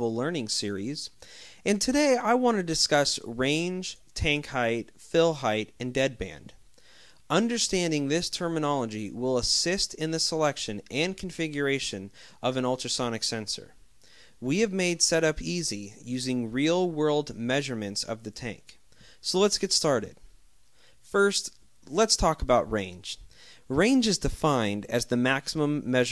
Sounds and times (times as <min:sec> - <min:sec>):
Speech: 0:00.0 - 0:06.6, 0:07.3 - 0:13.8, 0:14.4 - 0:20.3, 0:21.1 - 0:26.1.